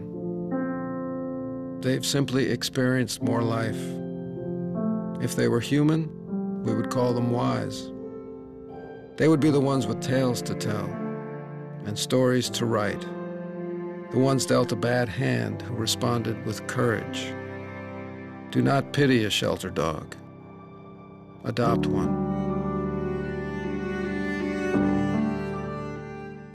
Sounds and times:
Music: 0:00.0 - 0:26.5
Speech: 0:01.8 - 0:04.0, 0:05.2 - 0:06.1, 0:06.7 - 0:07.9, 0:09.2 - 0:11.0, 0:11.8 - 0:13.1, 0:14.1 - 0:17.4, 0:18.5 - 0:20.2, 0:21.5 - 0:22.2.

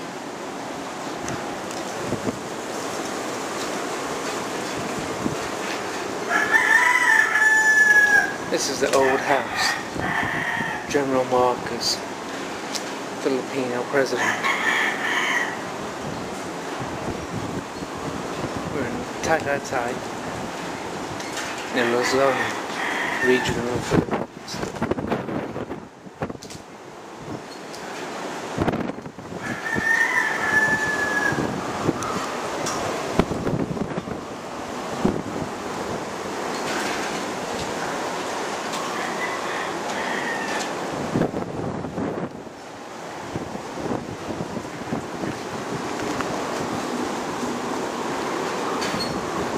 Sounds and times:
Speech: 0:08.5 - 0:09.8, 0:10.9 - 0:12.0, 0:13.2 - 0:14.2, 0:18.7 - 0:20.0, 0:21.7 - 0:22.6, 0:23.2 - 0:24.6.

